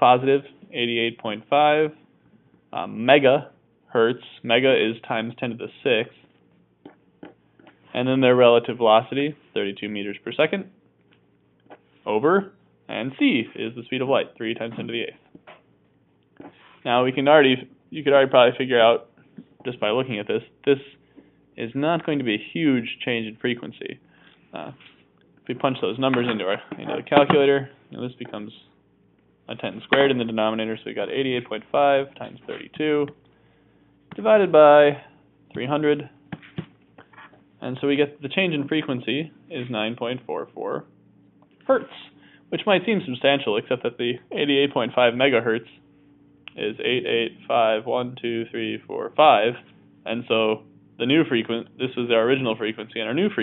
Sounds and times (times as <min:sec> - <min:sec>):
Speech: 0:00.0 - 0:02.0, 0:02.7 - 0:06.2, 0:07.9 - 0:10.8, 0:12.0 - 0:15.3, 0:16.8 - 0:21.0, 0:21.6 - 0:24.0, 0:24.6 - 0:24.8, 0:25.5 - 0:28.8, 0:29.5 - 0:33.2, 0:34.2 - 0:36.2, 0:37.6 - 0:40.9, 0:41.6 - 0:45.8, 0:46.5 - 0:53.4
Inside, small room: 0:00.0 - 0:53.4.